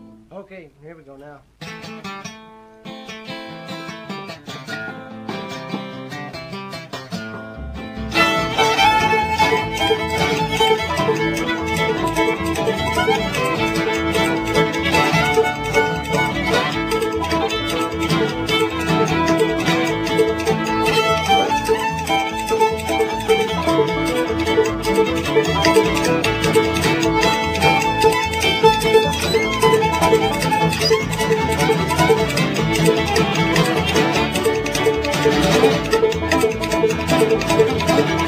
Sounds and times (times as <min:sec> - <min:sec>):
Music: 0:00.0 - 0:00.5, 0:01.5 - 0:38.2.